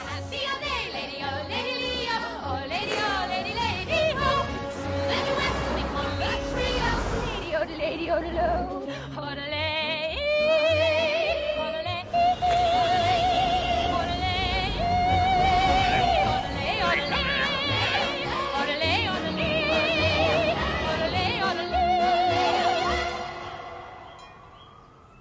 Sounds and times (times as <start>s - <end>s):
Music: 0.0s - 24.7s.